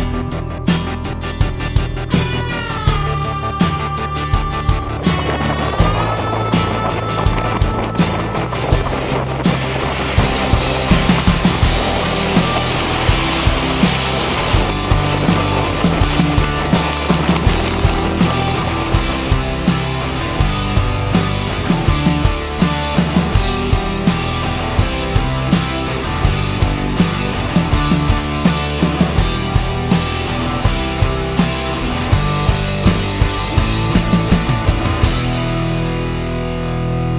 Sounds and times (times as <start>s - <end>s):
Rock music: 0.0s - 37.1s.